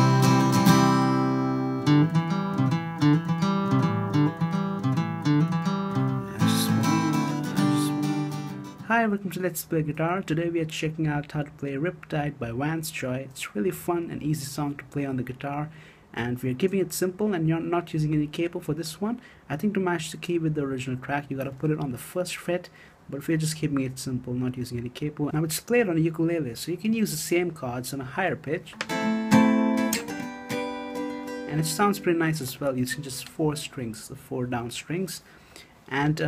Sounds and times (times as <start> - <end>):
Acoustic guitar: 0.0 - 9.0, 28.7 - 33.8.